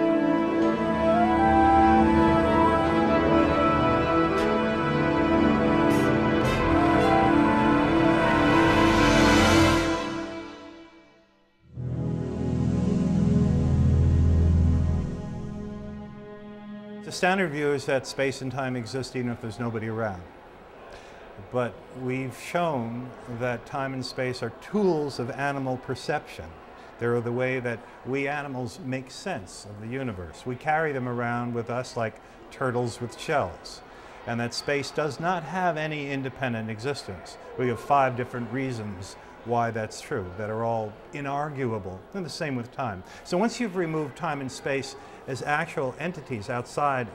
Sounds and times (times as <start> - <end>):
Speech: 17.1 - 20.3, 21.4 - 47.1.